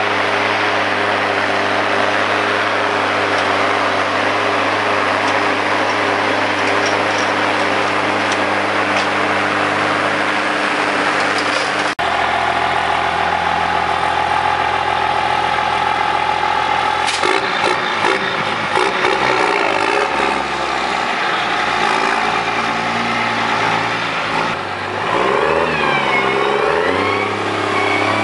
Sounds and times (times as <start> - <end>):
Heavy engine (low frequency): 0.0 - 28.2
Vehicle: 0.0 - 28.2
Accelerating, revving, vroom: 17.1 - 21.0, 21.6 - 28.2.